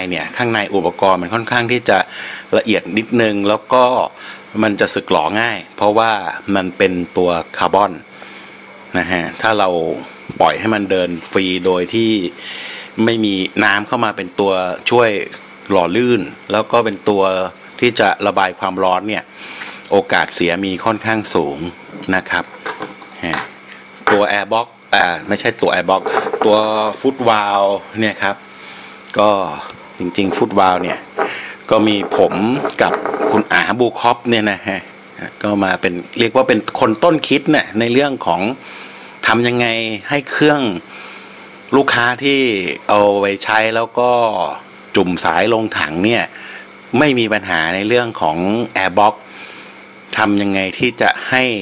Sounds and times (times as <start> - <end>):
Speech: 0.0 - 8.1, 8.9 - 12.4, 13.0 - 19.3, 19.9 - 22.6, 23.2 - 28.4, 29.1 - 31.1, 31.7 - 38.6, 39.2 - 40.9, 41.7 - 49.3, 50.1 - 51.6.